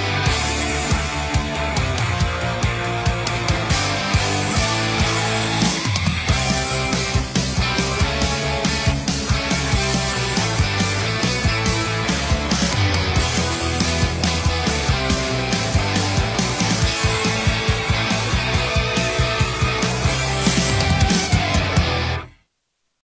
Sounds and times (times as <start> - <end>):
Rhythm and blues: 0.0 - 22.4.